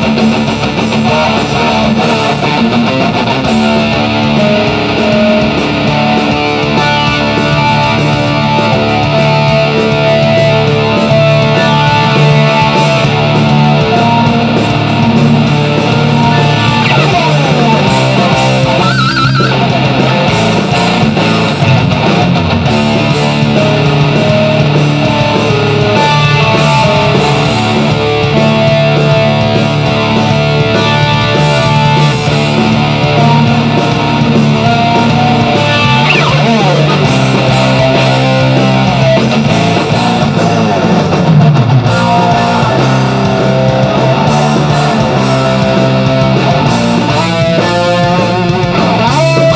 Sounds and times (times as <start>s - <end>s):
Electric guitar: 0.0s - 49.5s.